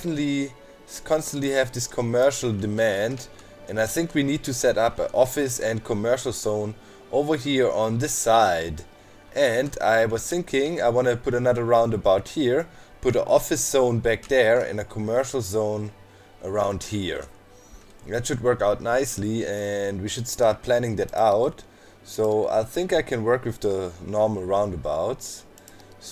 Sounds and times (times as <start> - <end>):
Speech: 0.0 - 17.3, 18.1 - 26.1
Music: 0.0 - 26.1.